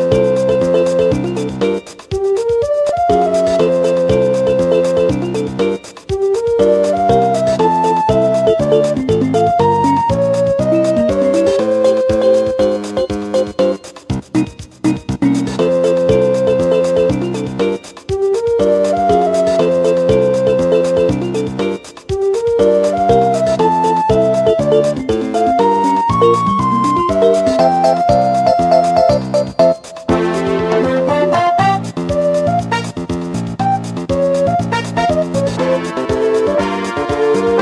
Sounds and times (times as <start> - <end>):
Music: 0.0 - 37.6.